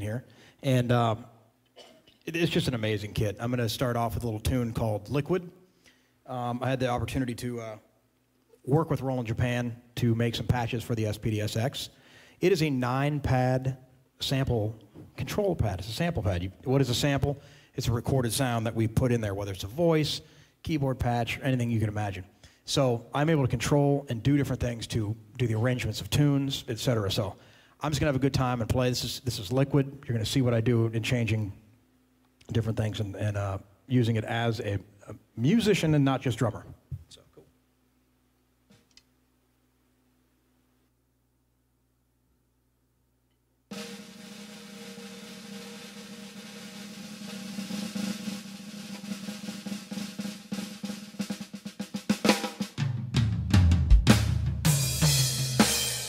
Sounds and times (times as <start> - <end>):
Speech: 0.0 - 1.4, 2.2 - 5.5, 6.3 - 7.9, 8.6 - 31.6, 32.4 - 37.5.